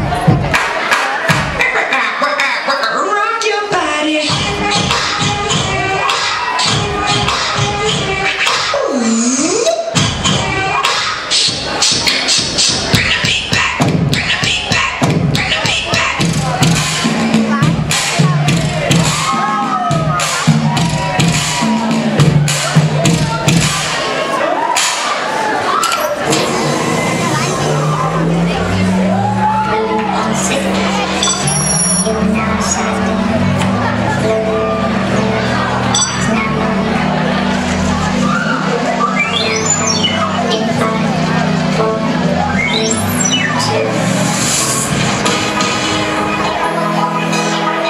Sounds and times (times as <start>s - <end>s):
Speech: 0.0s - 4.4s, 22.5s - 31.3s
Music: 0.0s - 47.9s.